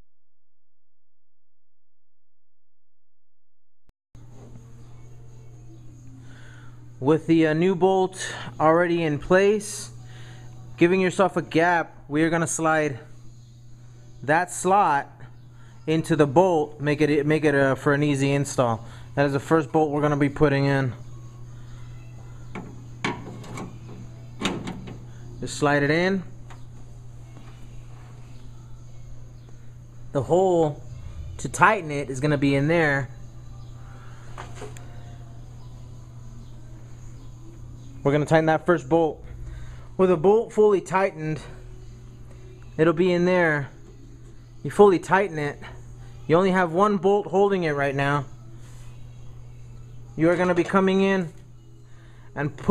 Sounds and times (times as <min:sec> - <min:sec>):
Speech: 0:15.9 - 0:21.0, 0:25.4 - 0:26.3, 0:38.0 - 0:39.2, 0:40.0 - 0:41.6, 0:42.8 - 0:43.7, 0:44.6 - 0:48.3, 0:50.2 - 0:51.4, 0:52.4 - 0:52.7.